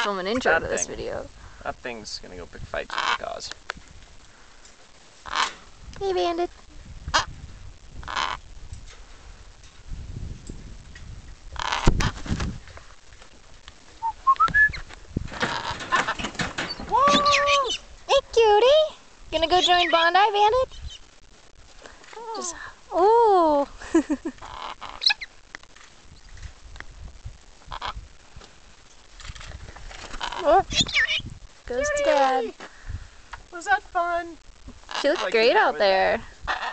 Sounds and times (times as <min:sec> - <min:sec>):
Bird: 0:14.0 - 0:17.9, 0:19.4 - 0:21.0, 0:30.1 - 0:31.3.